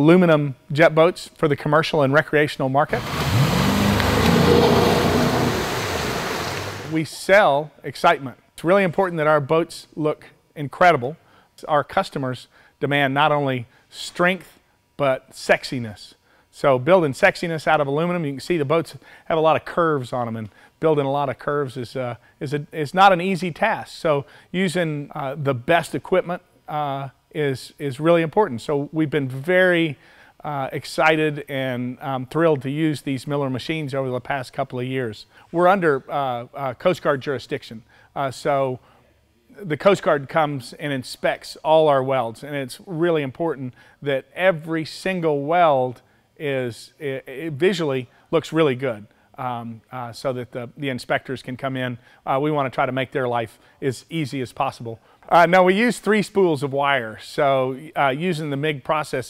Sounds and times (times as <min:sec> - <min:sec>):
Speech: 0:00.0 - 0:03.0, 0:06.9 - 0:38.8, 0:39.5 - 0:59.2.